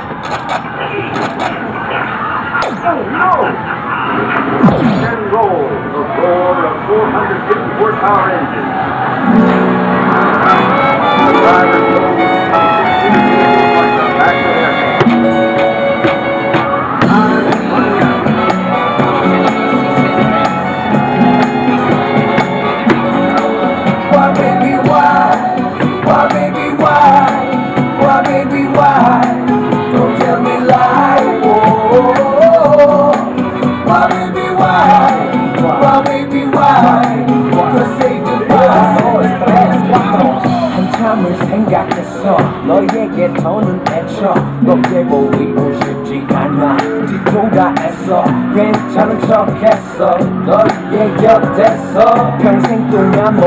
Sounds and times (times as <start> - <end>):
Speech: 5.0 - 8.6, 13.8 - 14.9
Music: 8.8 - 53.4.